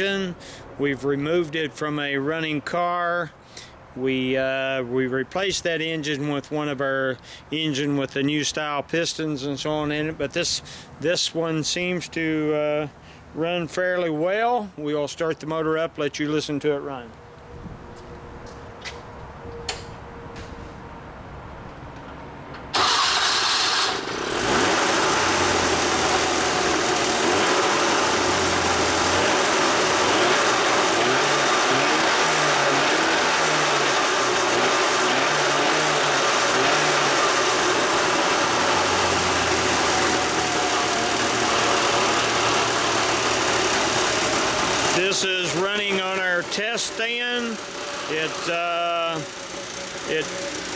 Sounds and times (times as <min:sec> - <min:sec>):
Medium engine (mid frequency): 0:00.0 - 0:08.7, 0:17.0 - 0:50.7.